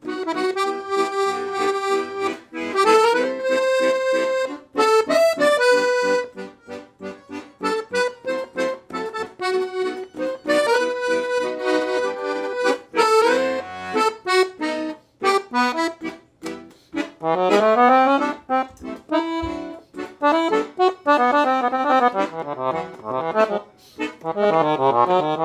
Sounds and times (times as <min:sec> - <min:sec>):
Accordion: 0:00.0 - 0:25.4.